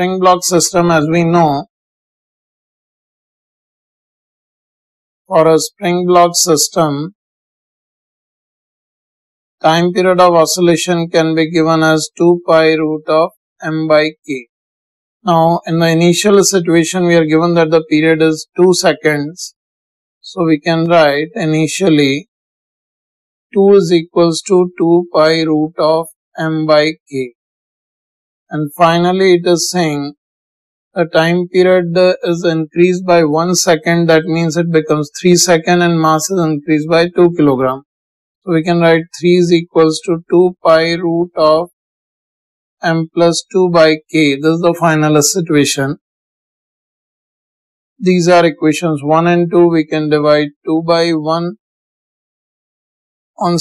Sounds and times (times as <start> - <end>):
Speech: 0.0 - 1.7, 5.3 - 7.2, 9.6 - 14.4, 15.3 - 19.5, 20.2 - 22.3, 23.6 - 27.3, 28.5 - 30.2, 31.0 - 37.8, 38.5 - 41.7, 42.8 - 46.0, 48.0 - 51.6, 53.4 - 53.6.